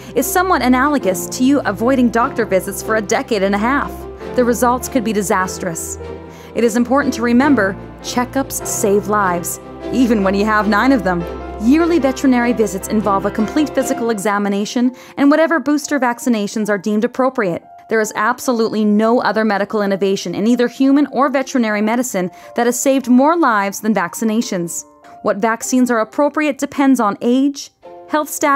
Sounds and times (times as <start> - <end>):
Music: 0.0 - 28.5
Speech: 0.2 - 6.0, 6.6 - 28.5.